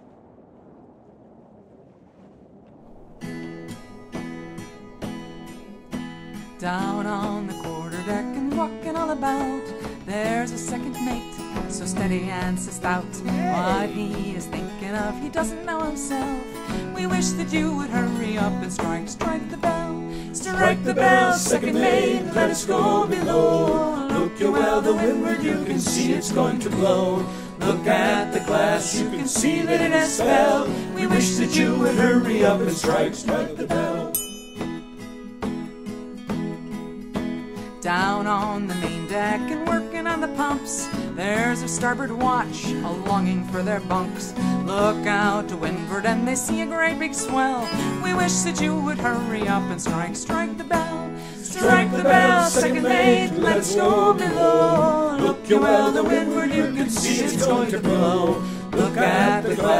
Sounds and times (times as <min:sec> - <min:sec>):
Music: 0:03.4 - 0:59.8.